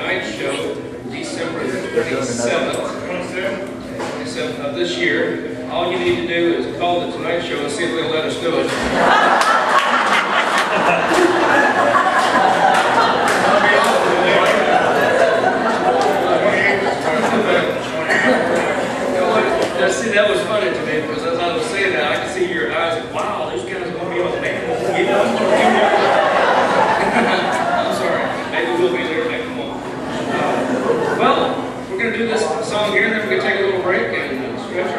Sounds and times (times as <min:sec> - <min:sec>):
Male speech, man speaking: 0:00.0 - 0:08.9, 0:13.4 - 0:15.4, 0:16.1 - 0:26.4, 0:27.1 - 0:34.9.